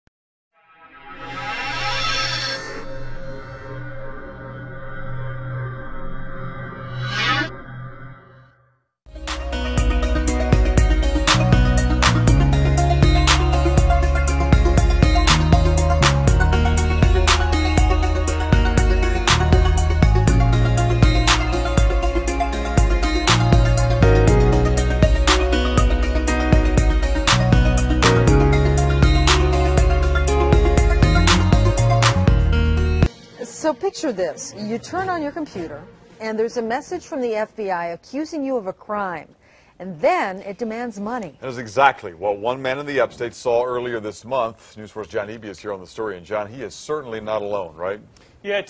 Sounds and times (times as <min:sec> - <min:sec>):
Music: 0:09.1 - 0:37.9.